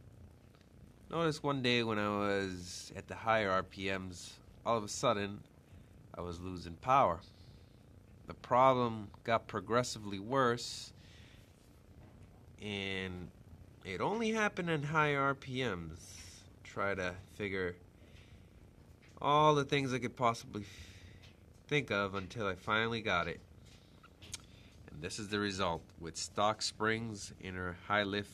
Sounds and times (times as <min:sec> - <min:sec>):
Speech: 0:01.1 - 0:05.5, 0:06.1 - 0:07.3, 0:08.3 - 0:11.0, 0:12.6 - 0:17.8, 0:19.2 - 0:20.8, 0:21.7 - 0:23.4, 0:24.9 - 0:28.3.